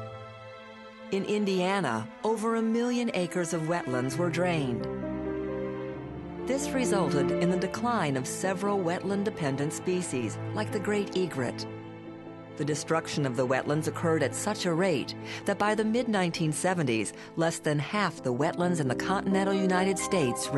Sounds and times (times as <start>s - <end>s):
Music: 0.0s - 20.5s
Speech: 1.1s - 4.9s, 6.5s - 11.7s, 12.6s - 20.5s.